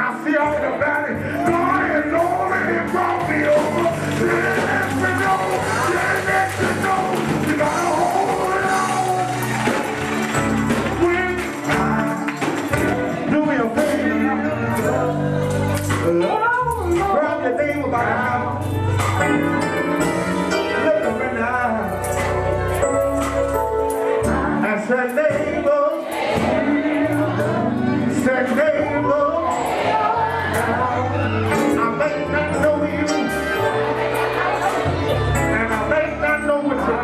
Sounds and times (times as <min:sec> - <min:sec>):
Male singing: 0:00.0 - 0:09.9, 0:10.8 - 0:18.7, 0:20.5 - 0:22.4, 0:24.1 - 0:33.8, 0:35.2 - 0:37.0
Choir: 0:24.0 - 0:32.2, 0:33.2 - 0:36.0.